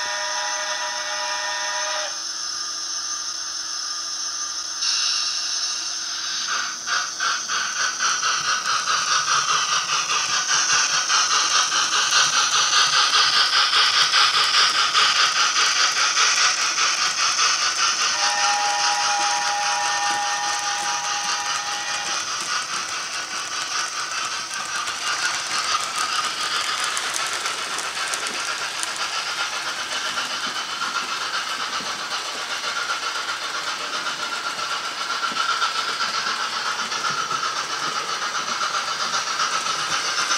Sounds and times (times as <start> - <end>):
Rattle: 4.8 - 40.3
Crackle: 10.2 - 33.1.